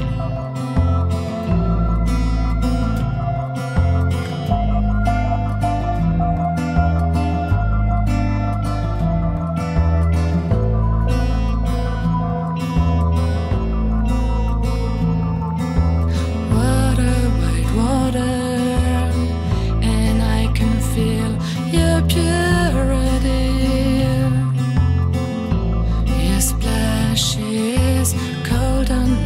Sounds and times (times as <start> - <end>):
Music: 0.0 - 29.2.